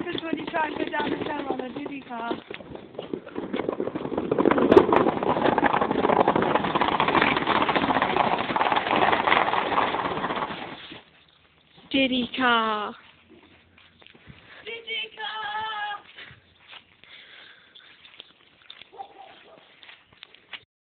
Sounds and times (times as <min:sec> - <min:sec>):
Speech: 0:11.9 - 0:13.0.